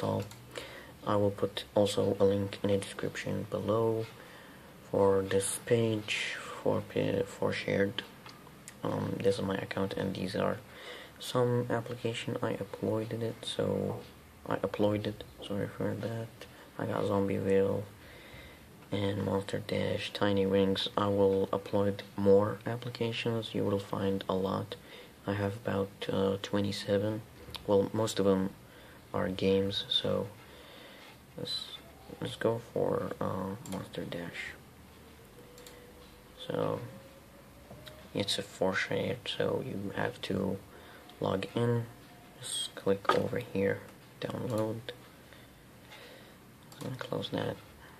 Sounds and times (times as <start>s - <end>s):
Speech: 0.0s - 0.4s, 1.0s - 4.2s, 4.8s - 18.0s, 18.9s - 30.4s, 31.4s - 34.6s, 36.4s - 37.0s, 38.1s - 45.0s, 46.8s - 47.8s
Inside, small room: 0.0s - 48.0s.